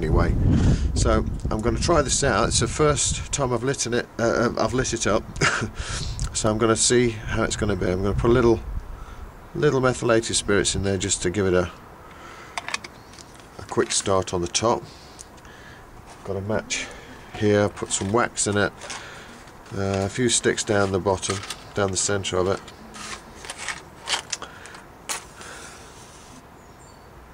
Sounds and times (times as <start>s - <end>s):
Speech: 0.0s - 0.4s, 1.0s - 5.2s, 6.3s - 8.6s, 9.6s - 11.8s, 13.6s - 14.9s, 16.2s - 18.8s, 19.7s - 22.7s.